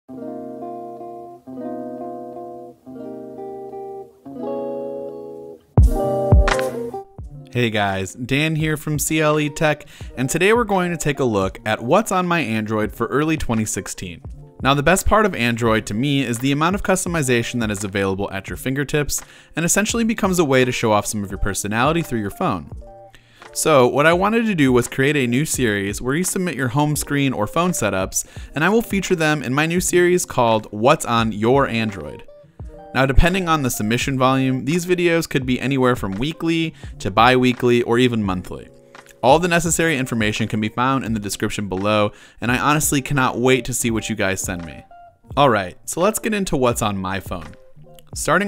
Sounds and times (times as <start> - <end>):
Music: 0.1 - 48.4
Speech: 7.5 - 22.7, 23.6 - 32.3, 32.9 - 47.6, 48.2 - 48.4.